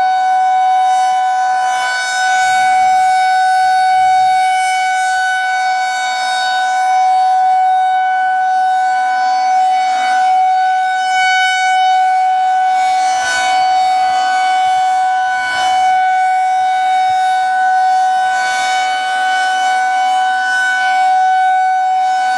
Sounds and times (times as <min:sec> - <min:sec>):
Civil defense siren: 0:00.0 - 0:22.3.